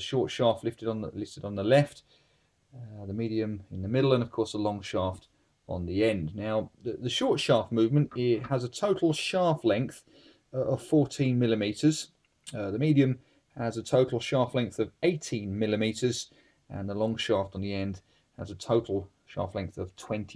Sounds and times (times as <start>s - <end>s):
Speech: 0.0s - 2.1s, 2.8s - 20.3s.